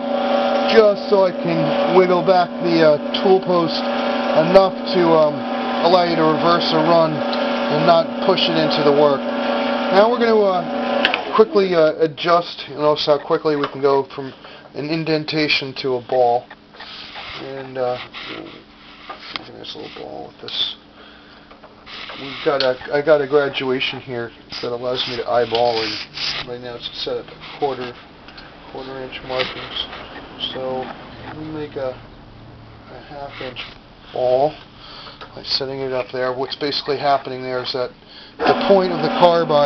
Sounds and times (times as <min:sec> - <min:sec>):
Speech: 0:00.7 - 0:09.2, 0:09.9 - 0:10.7, 0:11.3 - 0:16.5, 0:17.4 - 0:18.6, 0:19.4 - 0:20.8, 0:22.2 - 0:28.0, 0:28.7 - 0:32.0, 0:32.9 - 0:34.6, 0:35.4 - 0:39.6.